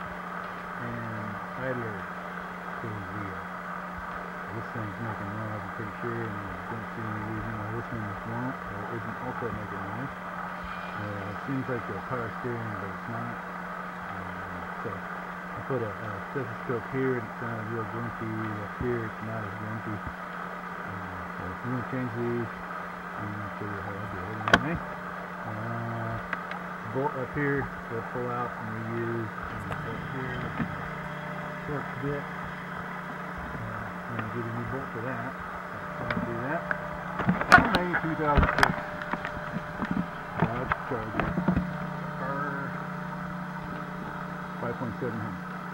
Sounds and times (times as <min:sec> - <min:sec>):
Speech: 0:00.8 - 0:02.0, 0:02.8 - 0:03.4, 0:04.5 - 0:10.2, 0:11.0 - 0:13.4, 0:14.1 - 0:15.0, 0:15.6 - 0:20.1, 0:20.8 - 0:22.5, 0:23.2 - 0:30.8, 0:31.6 - 0:32.3, 0:33.4 - 0:36.7, 0:37.5 - 0:38.7, 0:40.4 - 0:41.4, 0:42.2 - 0:42.8, 0:44.6 - 0:45.4.